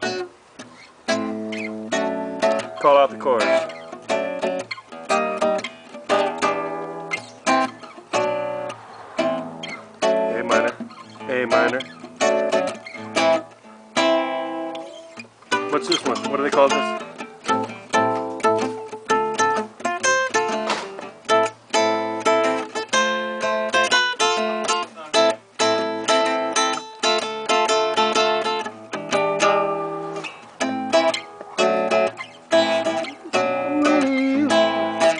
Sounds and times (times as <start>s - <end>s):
Guitar: 0.0s - 35.1s.